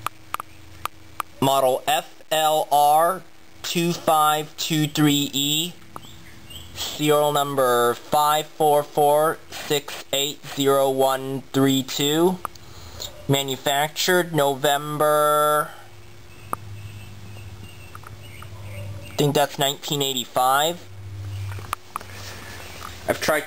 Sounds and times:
Speech: 0:01.4 - 0:05.8, 0:06.8 - 0:12.4, 0:13.3 - 0:15.8, 0:19.2 - 0:20.9, 0:23.0 - 0:23.4.

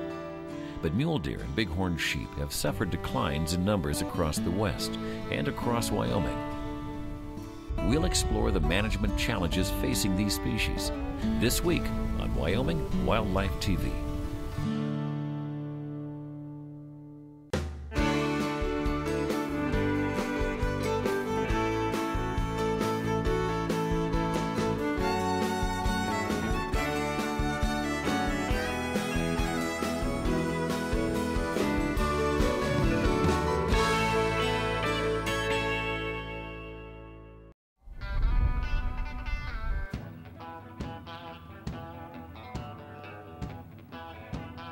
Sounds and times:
Music: 0:00.0 - 0:44.7
Speech: 0:00.8 - 0:06.4, 0:07.8 - 0:14.1.

